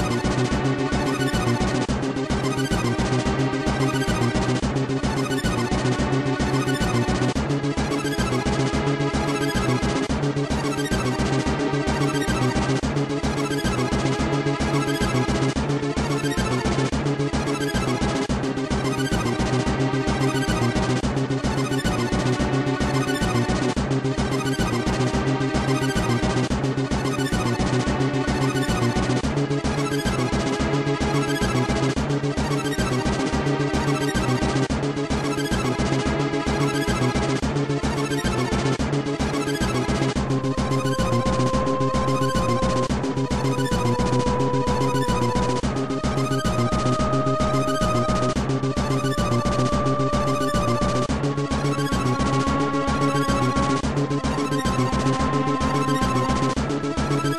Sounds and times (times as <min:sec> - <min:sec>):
Music: 0:00.0 - 0:57.3.